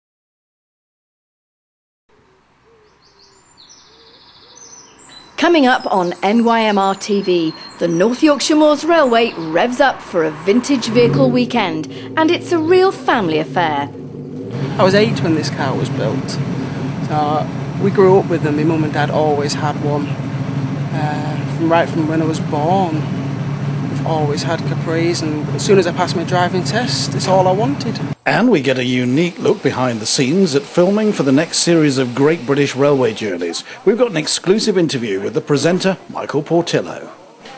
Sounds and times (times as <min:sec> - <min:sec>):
Outside, rural or natural: 0:02.1 - 0:37.5
Vehicle: 0:02.1 - 0:37.5
Chirp, tweet: 0:02.7 - 0:08.3
Speech: 0:05.4 - 0:13.9, 0:14.8 - 0:16.4, 0:17.1 - 0:20.2, 0:20.9 - 0:23.1, 0:24.0 - 0:37.5.